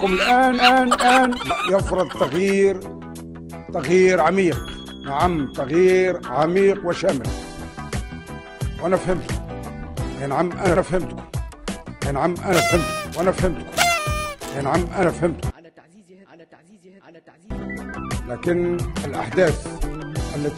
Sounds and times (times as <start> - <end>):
Male speech, man speaking: 0.0 - 2.9, 3.7 - 7.3, 8.8 - 9.4, 10.2 - 11.2, 12.0 - 13.6, 14.4 - 17.6, 18.2 - 20.5
Narration, monologue: 0.0 - 7.5, 12.1 - 16.6
Music: 0.0 - 15.6, 17.2 - 20.5.